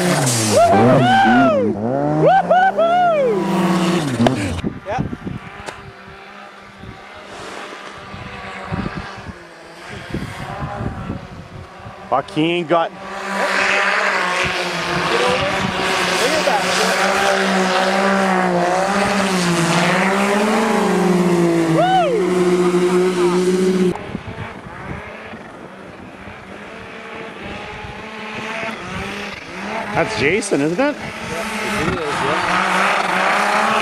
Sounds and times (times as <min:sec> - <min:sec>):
Vehicle: 0:00.0 - 0:33.8.